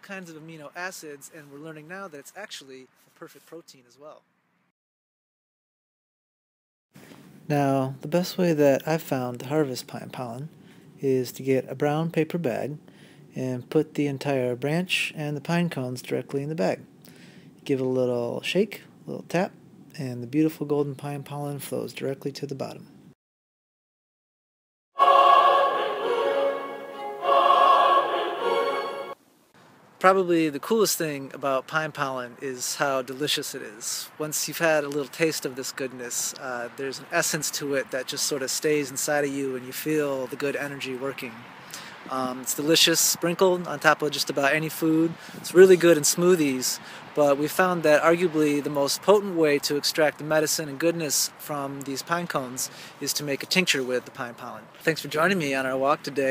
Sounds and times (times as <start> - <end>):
Speech: 0.0 - 4.2, 7.5 - 16.9, 17.6 - 22.9, 30.0 - 41.5, 42.1 - 56.3
Music: 25.0 - 29.2
Outside, rural or natural: 29.4 - 56.3.